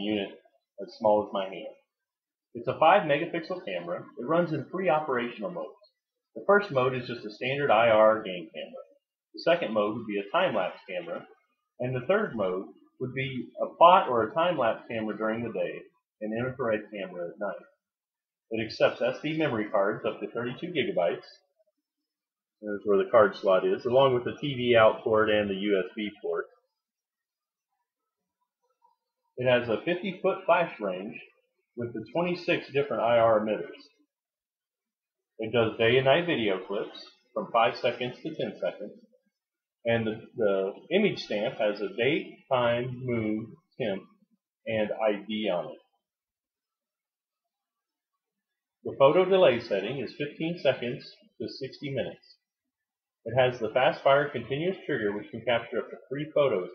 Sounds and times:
Speech: 0.0s - 17.9s, 18.5s - 21.6s, 22.6s - 26.8s, 29.4s - 34.1s, 35.4s - 39.1s, 39.8s - 46.1s, 48.8s - 52.5s, 53.2s - 56.7s.

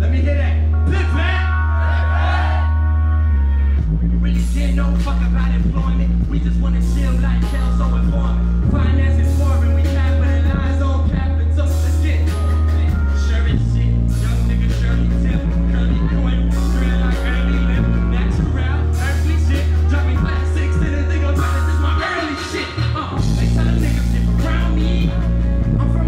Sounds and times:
Music: 0.0s - 26.0s.

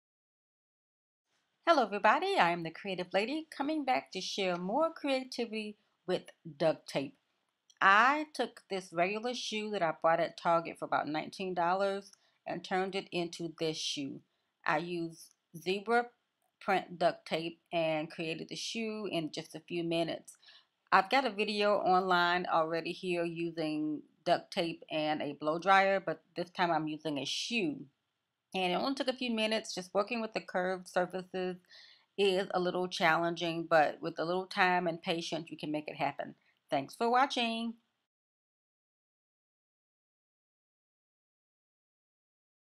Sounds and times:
Speech: 1.7s - 7.1s, 7.8s - 27.8s, 28.6s - 31.6s, 32.2s - 37.8s.

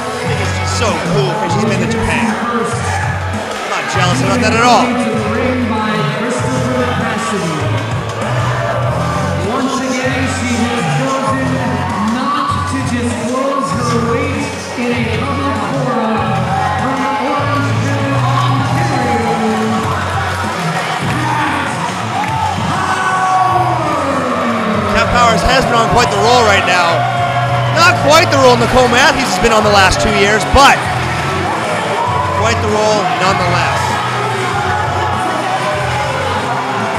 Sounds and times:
Music: 0.0s - 36.9s
Speech: 0.3s - 2.8s, 3.7s - 7.7s, 24.8s - 27.0s, 27.8s - 30.8s, 32.4s - 34.0s.

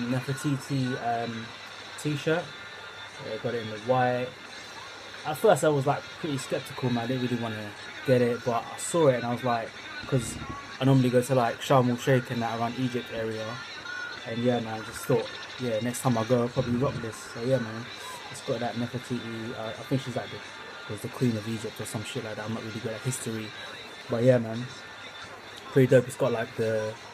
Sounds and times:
Speech: 0.0s - 2.5s, 3.2s - 4.4s, 5.2s - 13.6s, 14.2s - 24.8s, 25.7s - 27.0s.

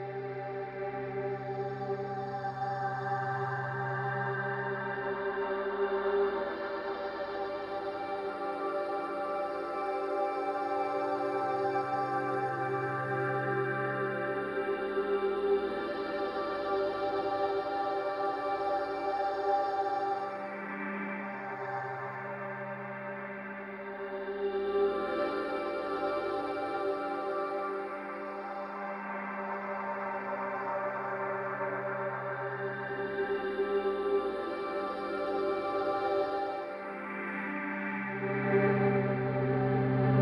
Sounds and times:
Ambient music: 0.0s - 40.2s.

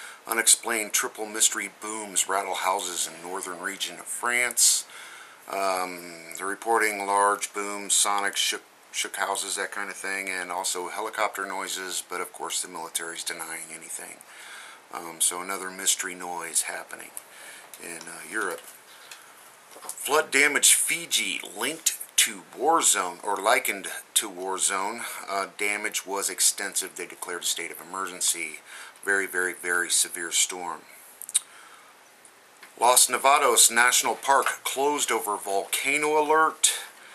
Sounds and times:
Speech: 0.3s - 4.9s, 5.5s - 14.3s, 14.9s - 17.2s, 17.8s - 18.6s, 20.0s - 30.9s, 32.8s - 36.9s.

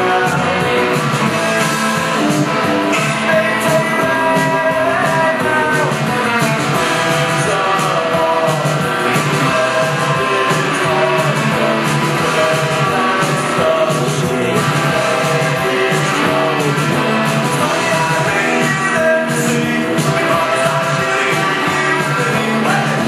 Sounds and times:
Guitar: 0.0s - 23.0s.

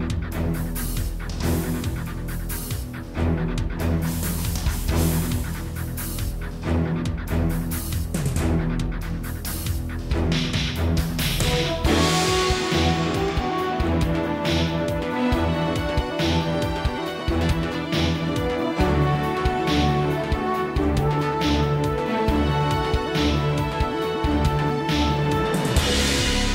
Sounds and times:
Music: 0.0s - 26.5s.

